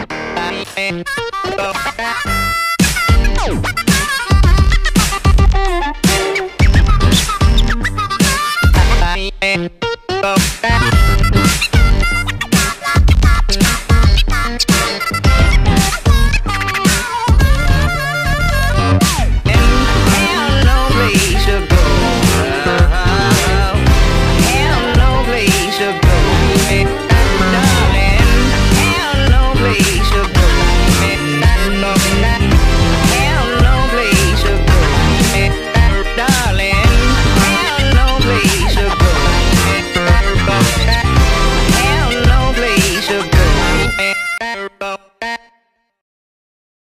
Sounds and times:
Music: 0.0s - 46.0s.

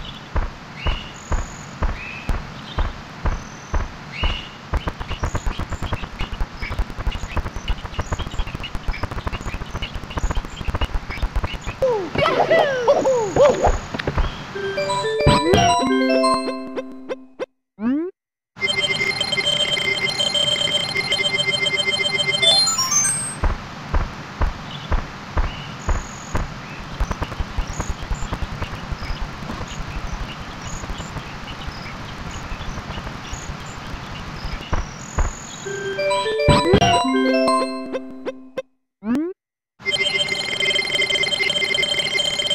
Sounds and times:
Outside, rural or natural: 0.0s - 42.5s.

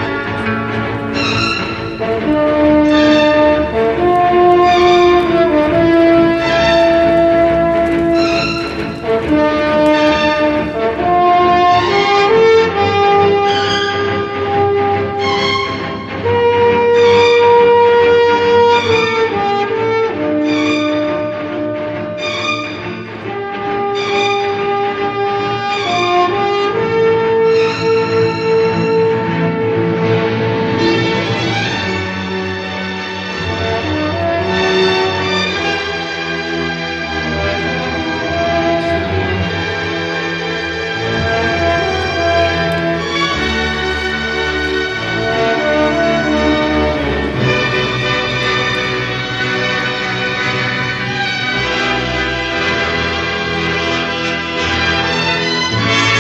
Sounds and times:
Music: 0.0s - 56.2s.

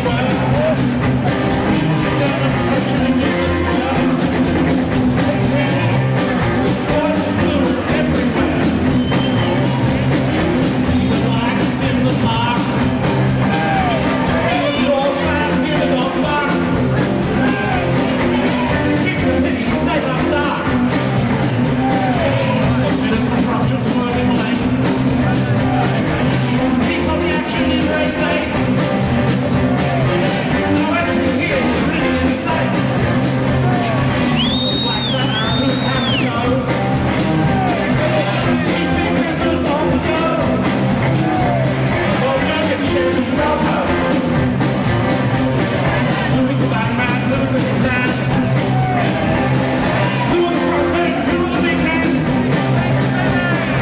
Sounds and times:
Speech: 0.0s - 0.8s, 1.8s - 4.4s, 5.2s - 8.7s, 13.6s - 16.8s, 18.4s - 20.8s, 22.0s - 28.6s, 30.6s - 32.8s, 34.8s - 36.8s, 42.0s - 44.2s, 46.0s - 49.3s, 50.0s - 53.8s
Music: 0.0s - 53.8s.

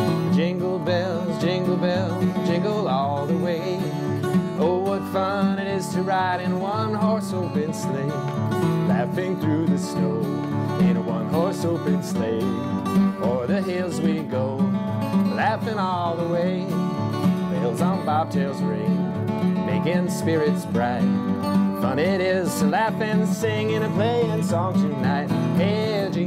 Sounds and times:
Music: 0.0s - 26.2s.

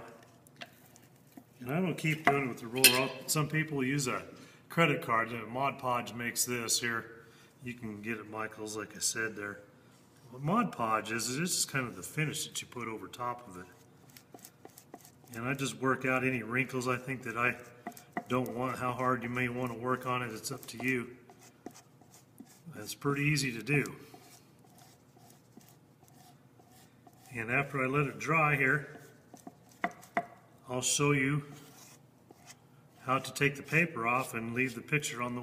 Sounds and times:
Rub: 0.2s - 1.6s, 13.4s - 15.8s, 16.7s - 30.3s, 31.4s - 34.4s.

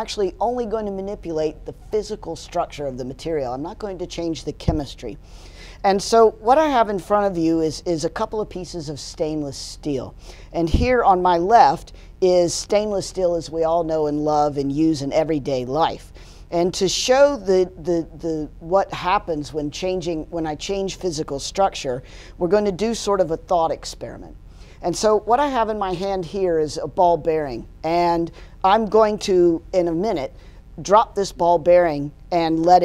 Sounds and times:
Speech: 0.0s - 5.2s, 5.8s - 32.8s.

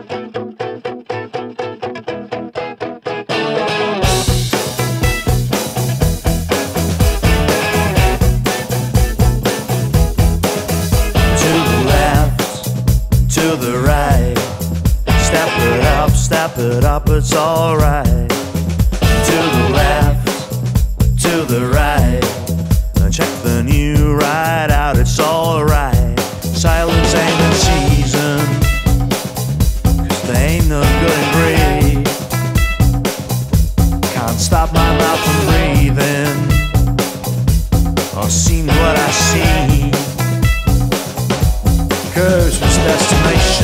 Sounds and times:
Happy music: 3.3s - 43.6s.

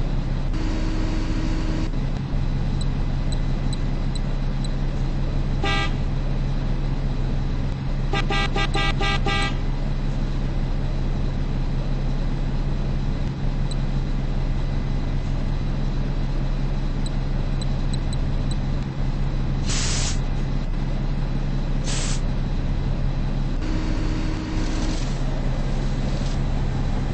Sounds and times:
Bus: 0.0s - 27.1s.

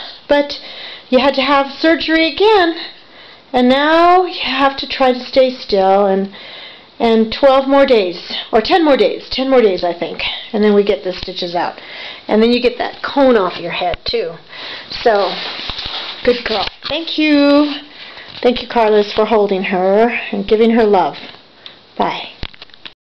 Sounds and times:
Speech: 0.0s - 3.0s, 3.6s - 6.4s, 7.0s - 15.5s, 16.2s - 21.3s, 22.0s - 22.4s.

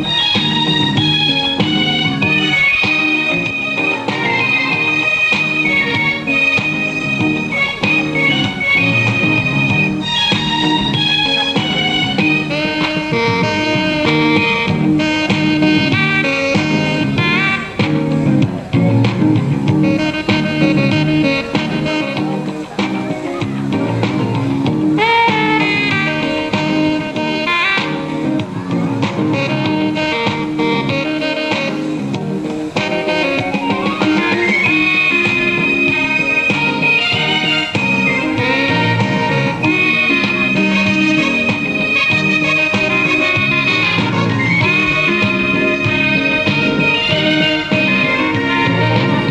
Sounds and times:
Music: 0.0s - 49.3s.

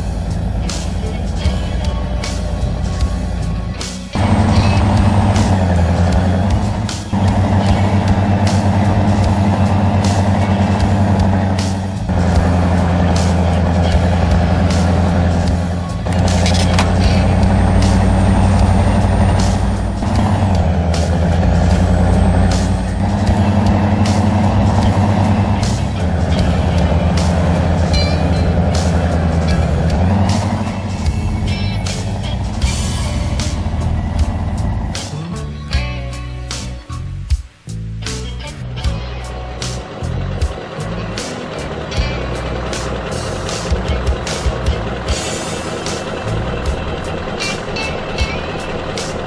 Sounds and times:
Music: 0.0s - 49.2s
Truck: 0.0s - 49.2s.

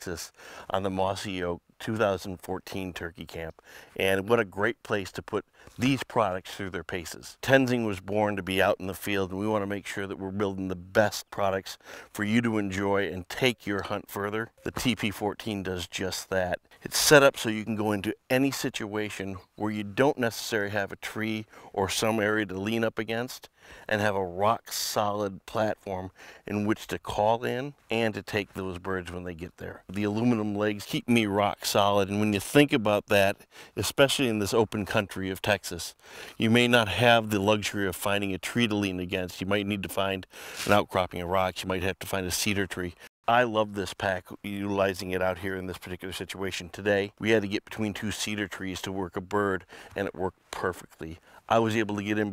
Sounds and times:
Speech: 0.0s - 52.3s.

